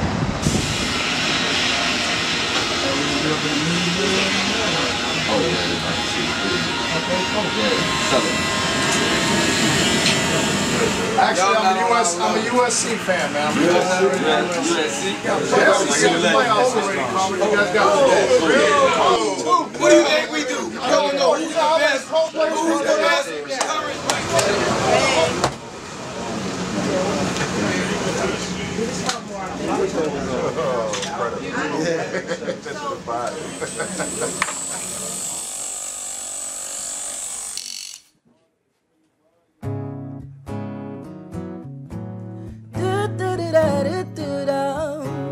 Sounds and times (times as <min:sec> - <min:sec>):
Speech: 0:02.6 - 0:08.4, 0:10.7 - 0:35.4.